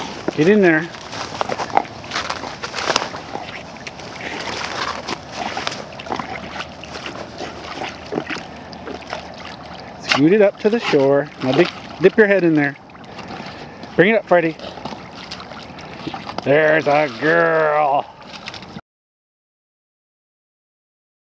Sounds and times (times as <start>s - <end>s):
Speech: 10.1s - 12.8s, 14.0s - 14.6s, 16.4s - 18.1s.